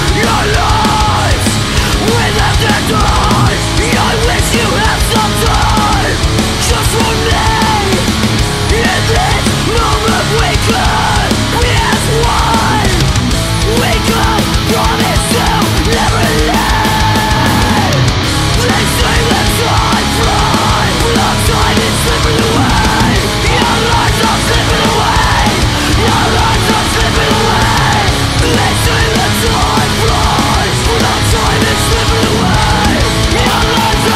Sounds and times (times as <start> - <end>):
Rhythm and blues: 0.0 - 34.1.